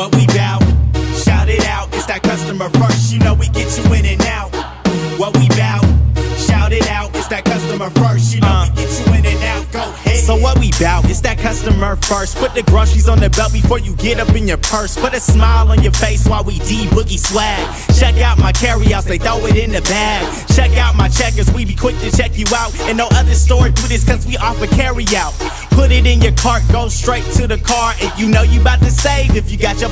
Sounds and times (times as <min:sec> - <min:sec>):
Theme music: 0:00.0 - 0:29.9.